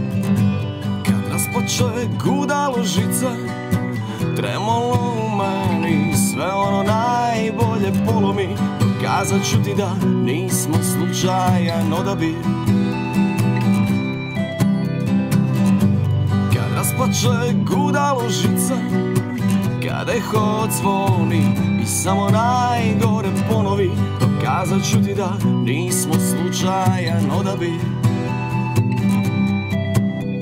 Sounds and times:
Music: 0.0s - 30.4s.

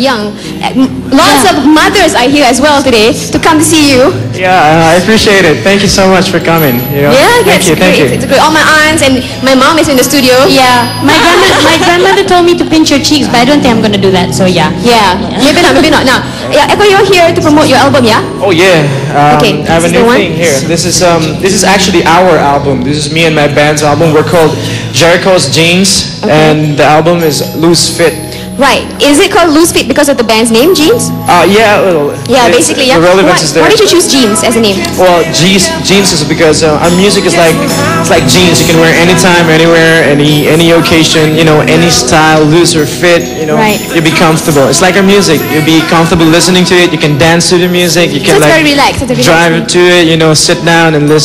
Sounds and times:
Music: 0.0s - 51.2s.

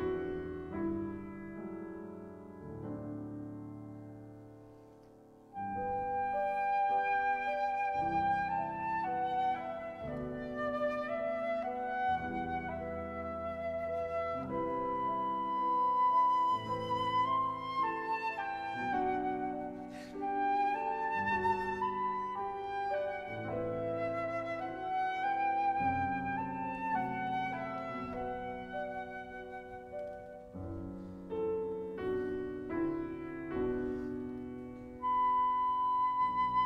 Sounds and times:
Flute: 0.0s - 3.1s, 5.5s - 36.6s
Piano: 0.0s - 36.6s.

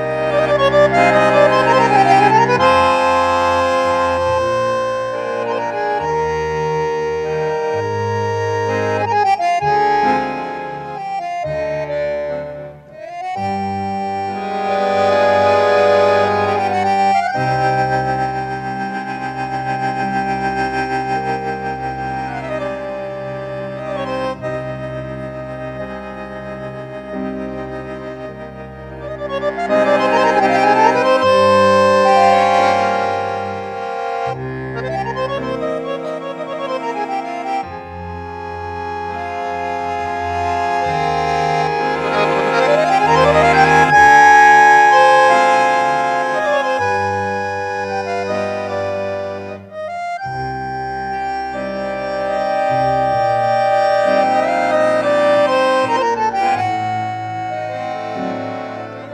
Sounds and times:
Music: 0.0s - 59.1s.

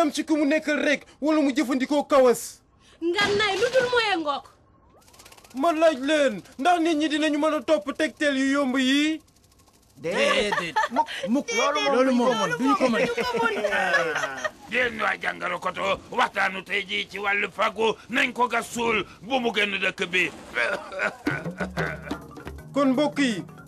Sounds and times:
Snicker: 10.1s - 11.4s, 12.6s - 14.9s, 20.5s - 22.3s.

